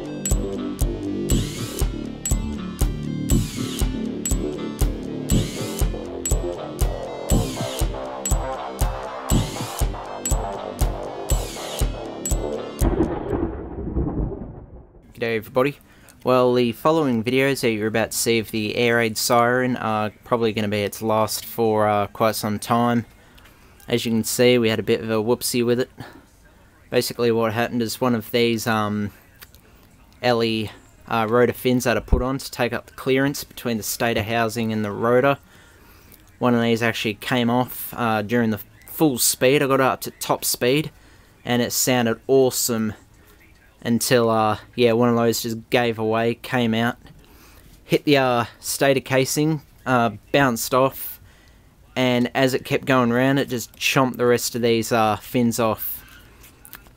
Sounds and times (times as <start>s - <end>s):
Speech: 15.2s - 23.1s, 23.8s - 35.4s, 36.2s - 47.1s, 47.8s - 51.2s, 51.8s - 56.9s.